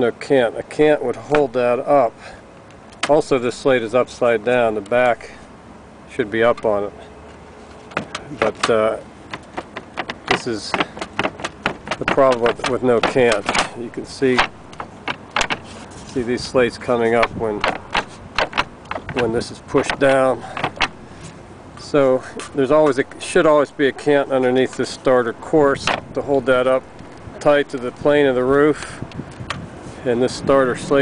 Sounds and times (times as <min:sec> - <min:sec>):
Speech: 0:00.0 - 0:02.2, 0:03.0 - 0:05.4, 0:06.1 - 0:07.0, 0:08.3 - 0:09.1, 0:10.3 - 0:10.9, 0:12.0 - 0:14.5, 0:16.2 - 0:17.7, 0:19.2 - 0:20.6, 0:21.8 - 0:29.0, 0:30.0 - 0:31.0
Outside, urban or manmade: 0:00.0 - 0:31.0.